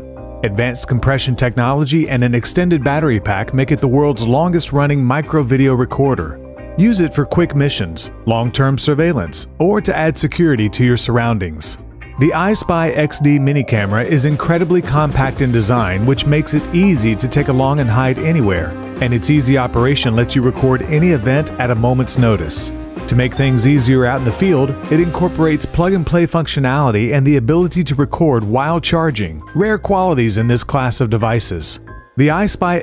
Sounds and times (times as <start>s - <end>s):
Music: 0.0s - 32.8s
Speech: 0.4s - 32.8s.